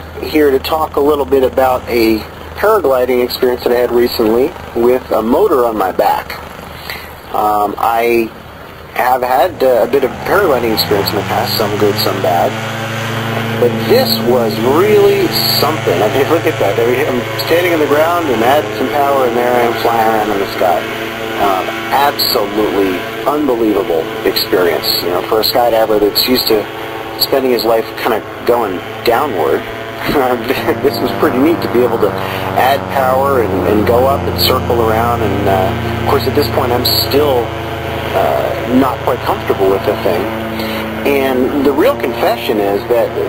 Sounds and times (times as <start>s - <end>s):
Chainsaw: 9.3s - 32.7s, 33.4s - 43.2s.